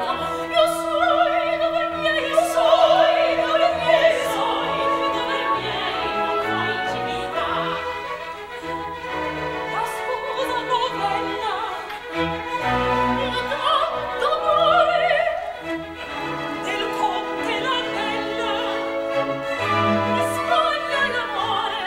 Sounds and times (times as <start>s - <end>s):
Opera: 0.0s - 21.8s.